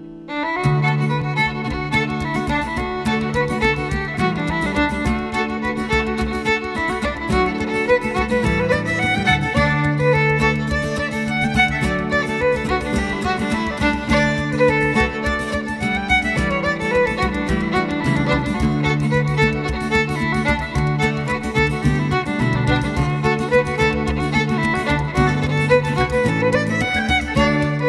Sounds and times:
Violin, fiddle: 0.0 - 27.8.

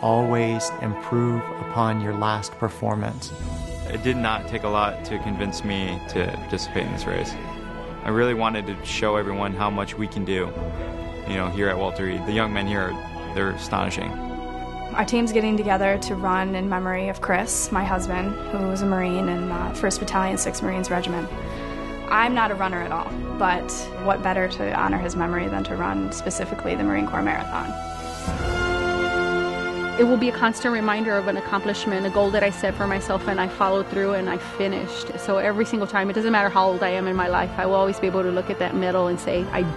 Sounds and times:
Music: 0.0 - 39.7.

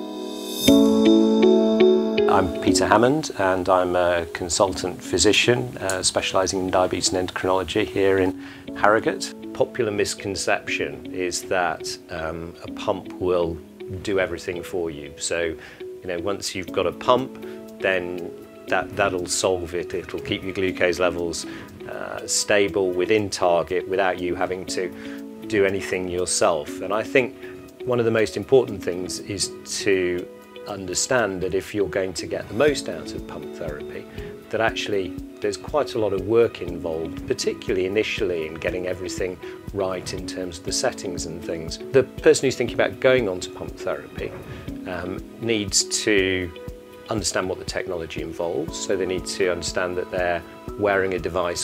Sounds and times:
Music: 0.0 - 51.6
Speech: 2.3 - 51.6.

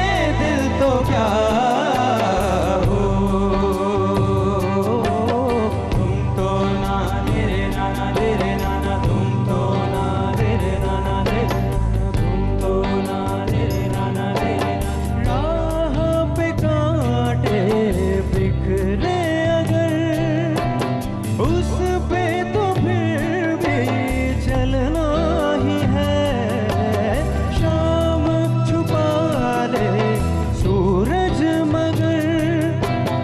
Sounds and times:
Traditional music: 0.0 - 33.2.

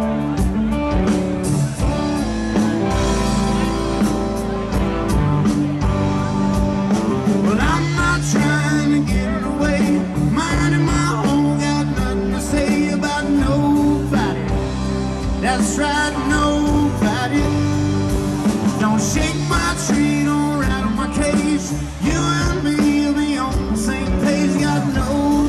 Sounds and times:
Music: 0.0 - 25.4.

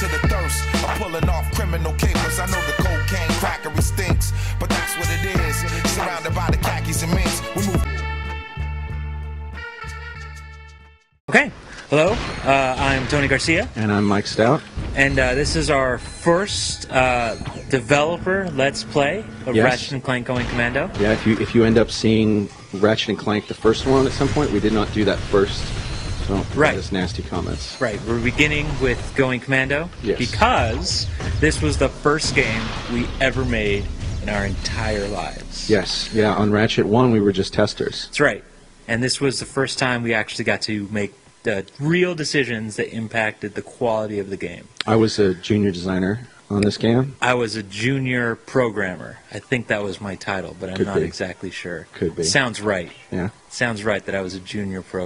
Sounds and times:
Speech: 0.0 - 7.9, 11.3 - 25.7, 26.3 - 55.0.

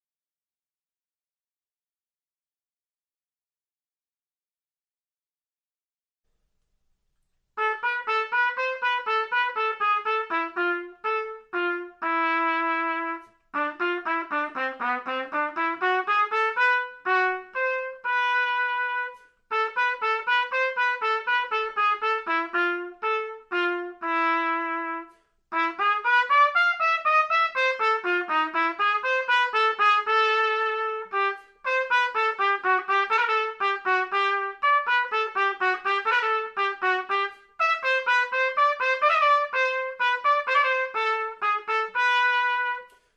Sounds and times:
Trumpet: 7.6 - 43.1.

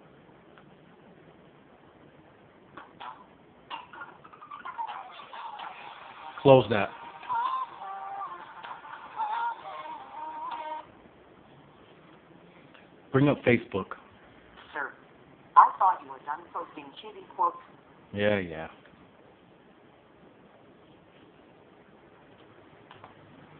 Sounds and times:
Music: 4.9 - 10.9
Male speech, man speaking: 6.4 - 7.0, 13.1 - 14.0, 18.1 - 18.8.

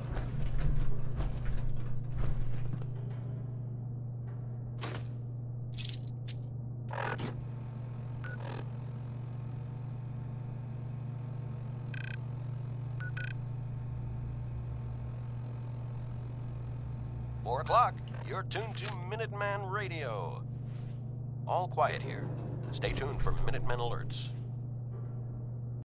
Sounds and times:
Speech: 17.4 - 20.4, 21.5 - 24.3.

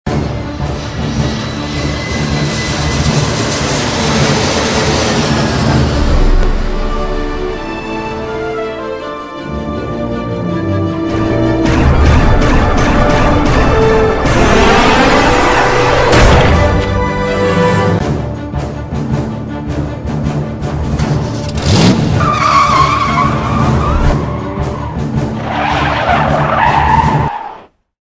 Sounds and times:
Theme music: 0.1 - 27.3.

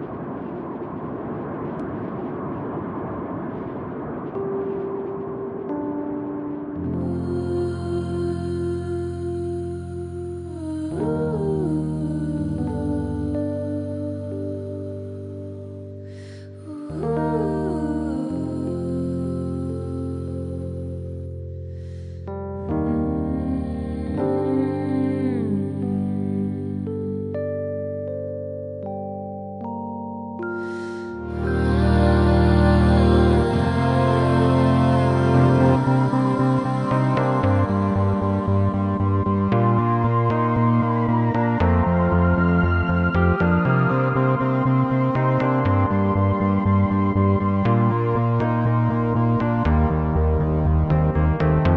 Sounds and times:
Music: 4.3 - 51.7.

